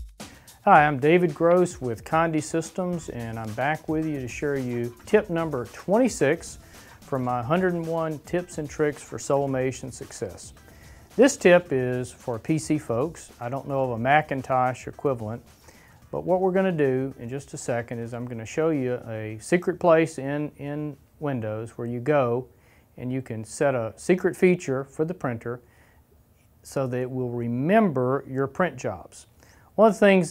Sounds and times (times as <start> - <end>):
Speech: 0.7 - 10.6, 11.2 - 15.4, 16.1 - 25.6, 26.6 - 30.3.